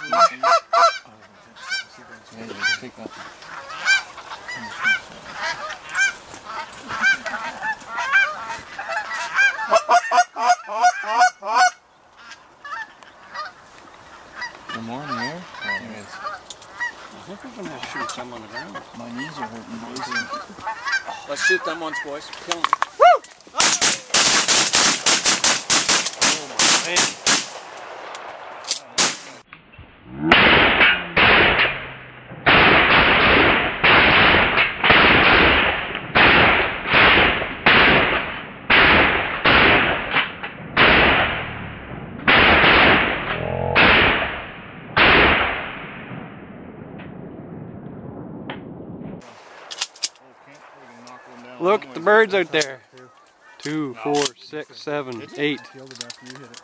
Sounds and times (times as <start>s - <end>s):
Honk: 0.0s - 13.6s, 14.3s - 22.3s, 55.2s - 56.6s.